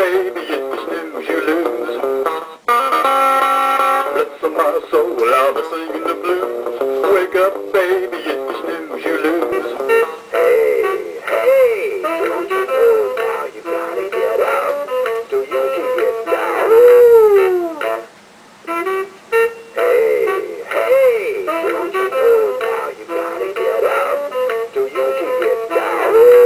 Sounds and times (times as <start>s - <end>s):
Music: 0.0s - 26.4s.